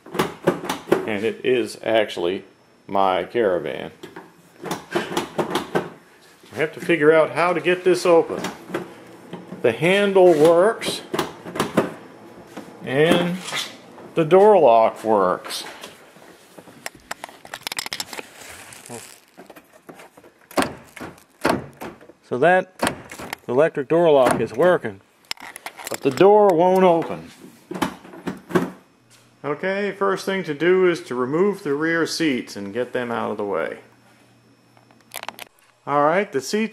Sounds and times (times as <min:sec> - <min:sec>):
Speech: 0:01.1 - 0:04.0, 0:06.5 - 0:08.5, 0:09.6 - 0:11.1, 0:12.8 - 0:13.5, 0:14.2 - 0:15.8, 0:22.3 - 0:22.8, 0:23.5 - 0:25.0, 0:25.9 - 0:27.4, 0:29.4 - 0:33.9, 0:35.9 - 0:36.7.